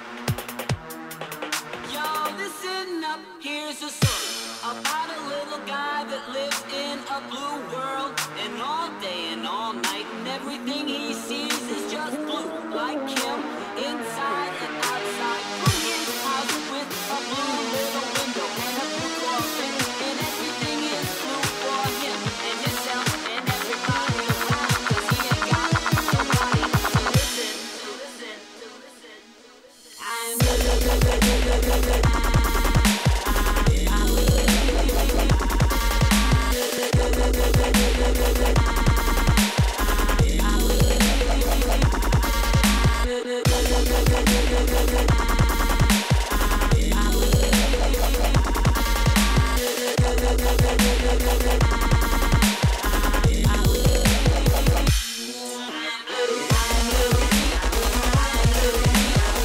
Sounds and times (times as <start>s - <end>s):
Dubstep: 0.0s - 59.4s.